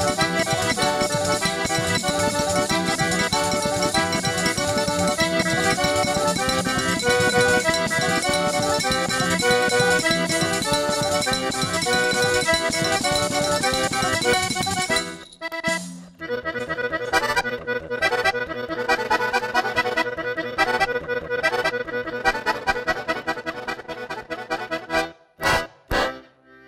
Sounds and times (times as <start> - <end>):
Accordion: 0.0 - 26.6.